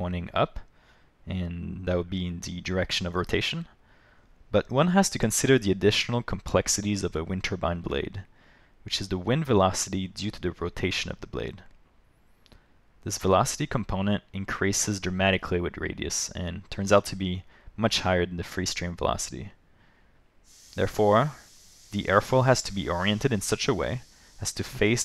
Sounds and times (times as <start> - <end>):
Speech: 0.0 - 0.7, 1.3 - 3.7, 4.5 - 8.3, 8.9 - 11.7, 13.0 - 19.6, 20.8 - 25.0.